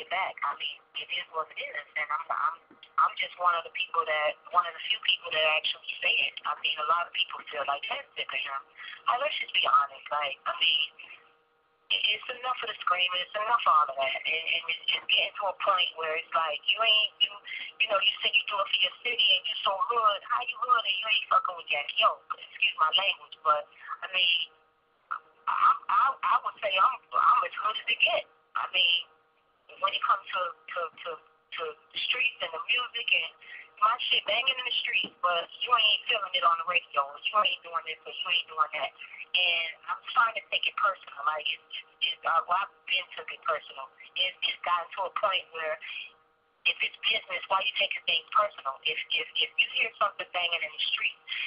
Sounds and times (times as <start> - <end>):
Speech: 0.0 - 11.2, 11.9 - 29.1, 29.7 - 46.1, 46.7 - 51.4.